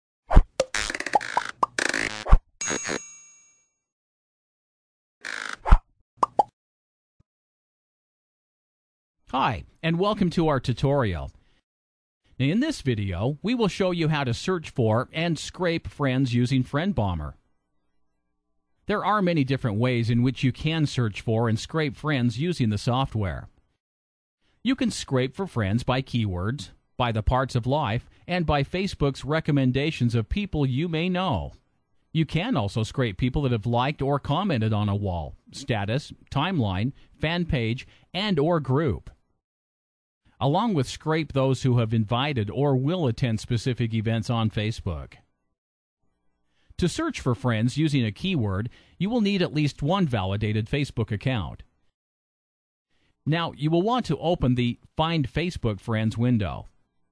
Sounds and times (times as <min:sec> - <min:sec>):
Plop: 0:06.2 - 0:06.6
Speech: 0:09.3 - 0:11.4, 0:12.4 - 0:17.4, 0:18.9 - 0:23.5, 0:24.6 - 0:31.6, 0:32.2 - 0:39.1, 0:40.4 - 0:45.2, 0:46.8 - 0:51.7, 0:53.2 - 0:56.7.